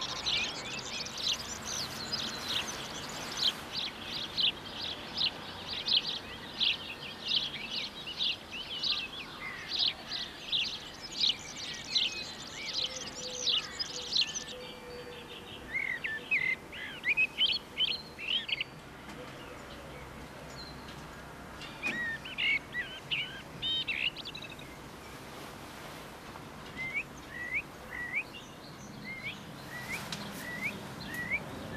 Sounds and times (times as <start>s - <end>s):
Bird vocalization, bird call, bird song: 0.0s - 25.5s, 26.6s - 31.7s.